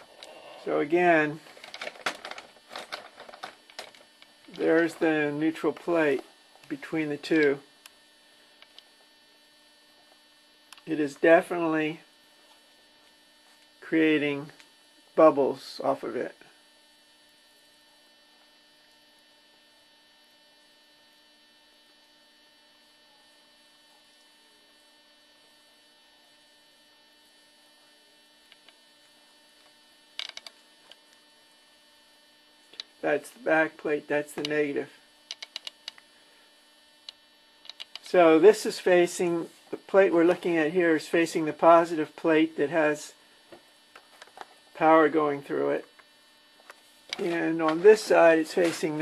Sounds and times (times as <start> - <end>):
Hum: 0.0 - 49.0
Mains hum: 0.0 - 49.0.